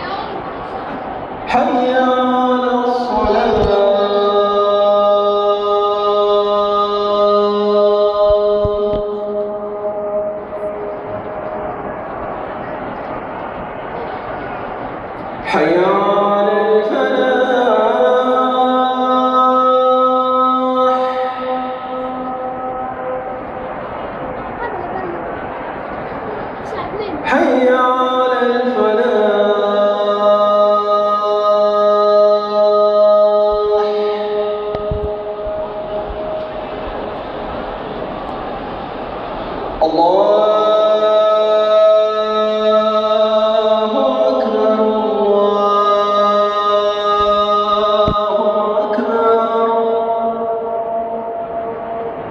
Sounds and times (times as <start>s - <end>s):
Chant: 0.0s - 52.3s.